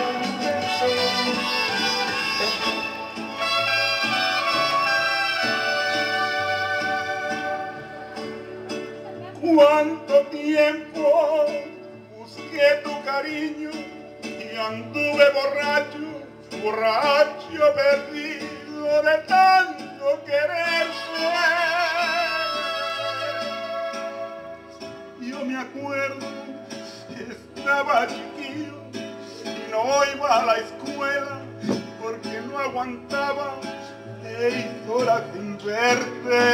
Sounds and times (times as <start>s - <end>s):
Male singing: 0.0s - 1.8s, 5.6s - 8.3s, 9.2s - 24.6s, 25.2s - 36.5s
Music: 0.0s - 36.5s.